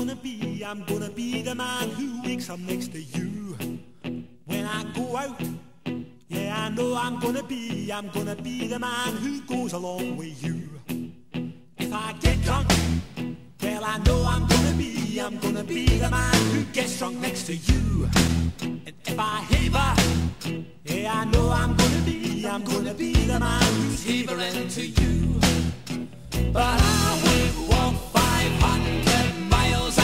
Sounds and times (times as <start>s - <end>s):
Music: 0.0s - 30.0s.